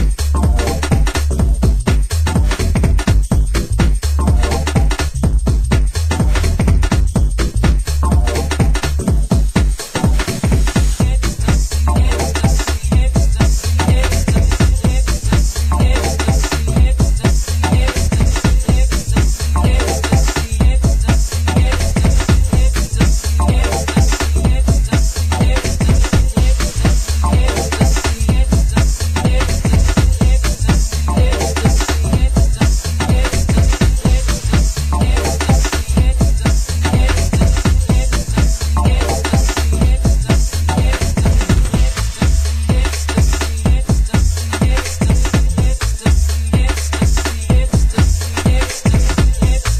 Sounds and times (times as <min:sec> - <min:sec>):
Disco: 0:00.0 - 0:49.7
Electronic music: 0:00.0 - 0:49.7.